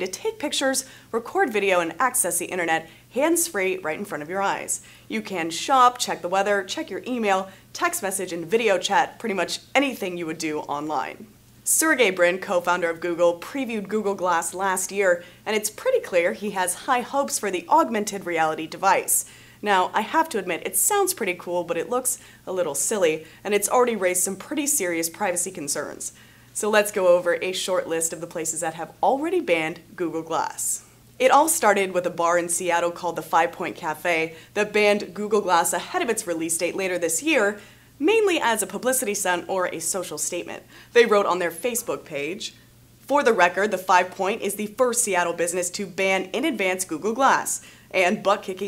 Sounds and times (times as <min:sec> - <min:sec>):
Speech: 0:00.0 - 0:48.6.